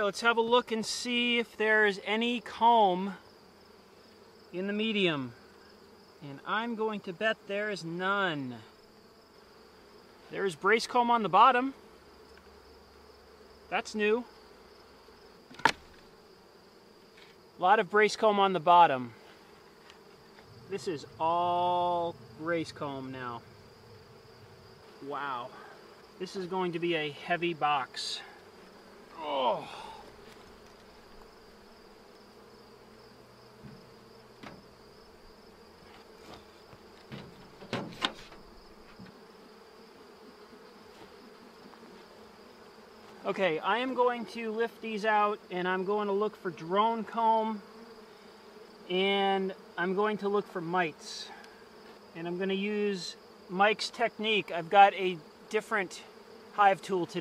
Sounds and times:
Speech: 0.0 - 3.2, 4.6 - 5.4, 6.2 - 8.7, 10.3 - 11.8, 13.7 - 14.3, 17.6 - 19.2, 20.7 - 23.4, 25.0 - 25.6, 26.2 - 28.3, 29.2 - 29.8, 43.2 - 47.6, 48.9 - 51.4, 52.2 - 57.2
Bee, wasp, etc.: 0.0 - 57.2.

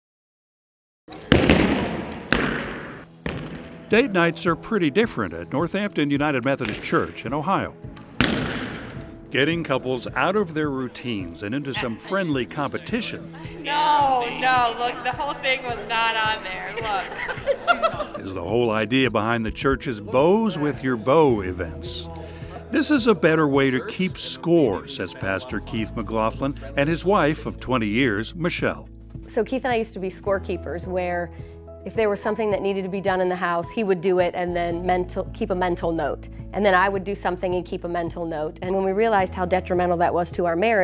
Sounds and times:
Arrow: 1.1 - 3.8, 6.6 - 7.0, 8.0 - 9.1.

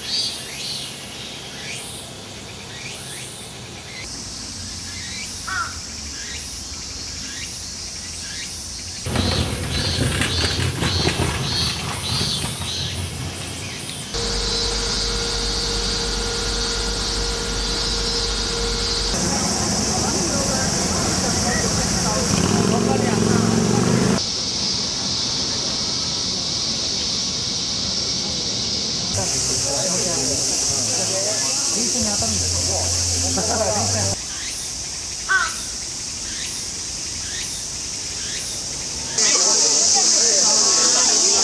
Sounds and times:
Hiss: 29.2 - 33.5.

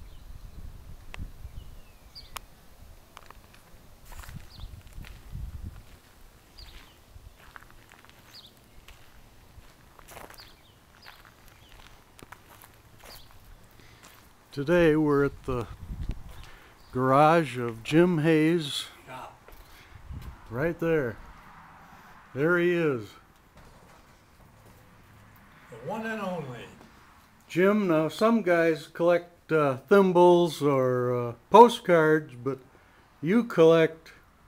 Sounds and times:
Walk, footsteps: 3.2 - 14.3
Speech: 14.6 - 15.7, 16.9 - 19.4, 20.5 - 21.2, 22.4 - 23.2, 25.7 - 26.9, 27.5 - 32.6, 33.2 - 34.2.

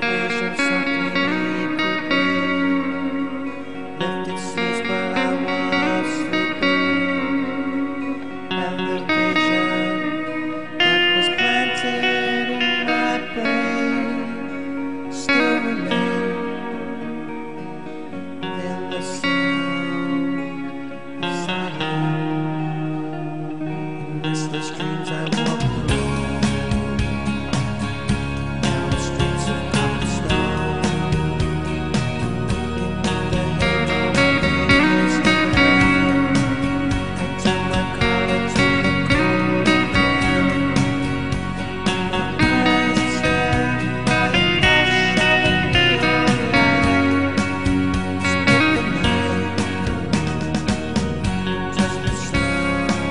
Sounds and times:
Music: 0.0 - 53.1.

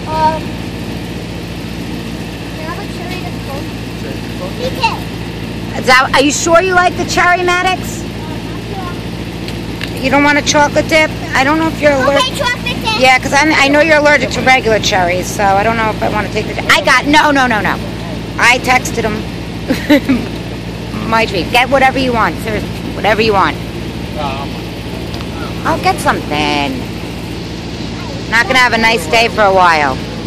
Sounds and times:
Vehicle: 0.0 - 30.2
Speech: 10.0 - 17.8, 18.4 - 19.2, 28.0 - 30.0.

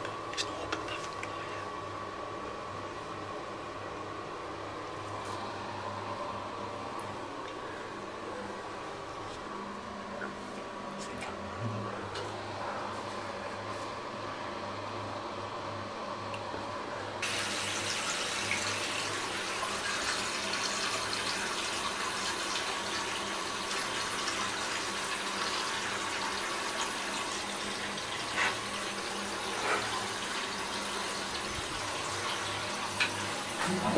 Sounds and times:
Sink (filling or washing): 17.2 - 33.9
Water: 17.2 - 33.9
Water tap, faucet: 17.2 - 33.9.

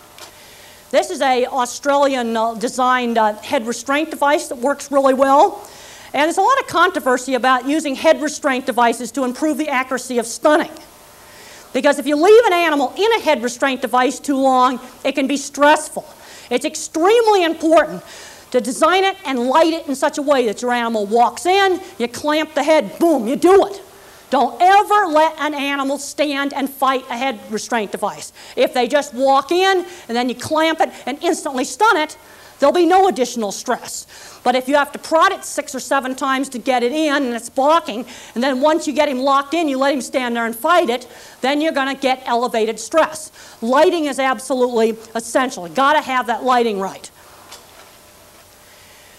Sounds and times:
Speech: 0.9 - 5.6, 6.2 - 10.9, 11.8 - 47.1.

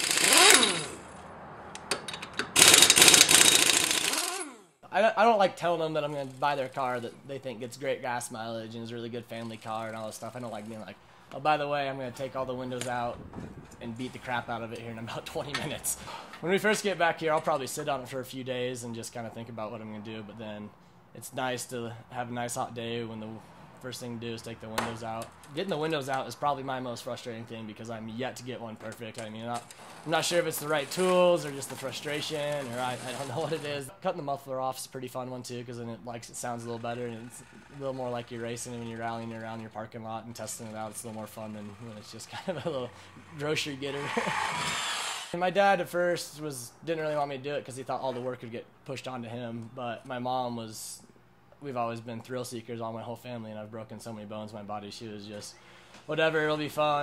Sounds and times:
Speech: 4.9 - 13.2, 13.8 - 44.3, 45.4 - 57.0.

